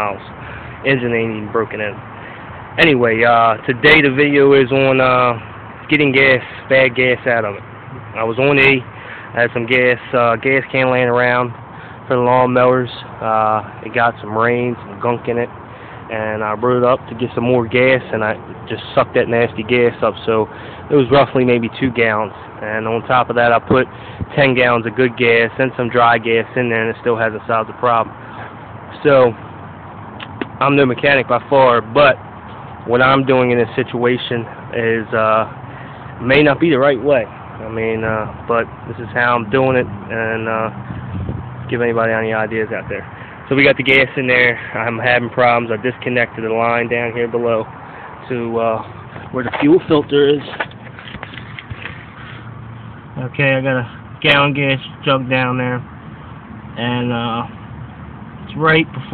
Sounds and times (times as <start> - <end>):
Speech: 0.0 - 2.0, 2.8 - 15.5, 16.1 - 28.1, 28.9 - 29.4, 30.6 - 32.2, 32.8 - 35.5, 36.2 - 40.8, 41.7 - 50.6, 53.2 - 55.9, 56.8 - 57.6, 58.5 - 59.1.